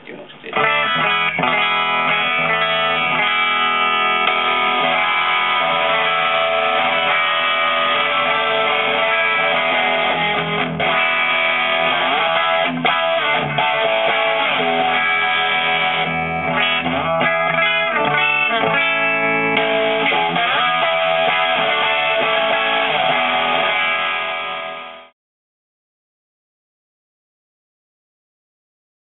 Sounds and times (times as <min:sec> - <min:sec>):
Music: 0:00.5 - 0:25.2.